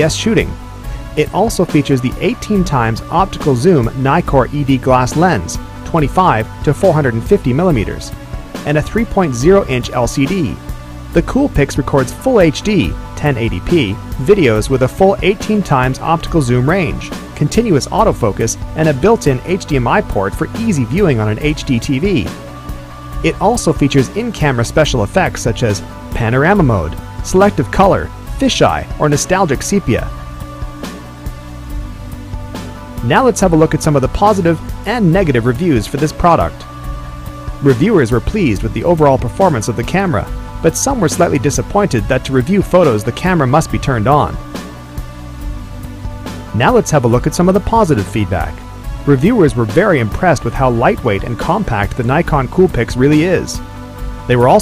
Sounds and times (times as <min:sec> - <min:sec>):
Speech: 0:00.0 - 0:00.6, 0:01.2 - 0:10.6, 0:11.2 - 0:22.4, 0:23.2 - 0:30.1, 0:33.0 - 0:36.6, 0:37.6 - 0:44.4, 0:46.6 - 0:53.6, 0:54.3 - 0:54.6
Music: 0:00.0 - 0:54.6.